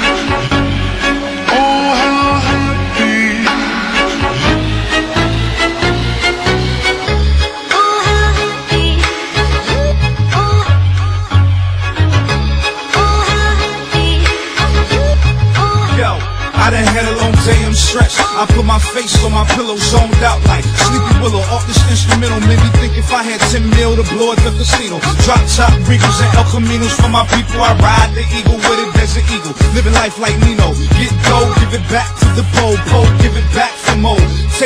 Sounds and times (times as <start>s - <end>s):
Music: 0.0s - 34.6s.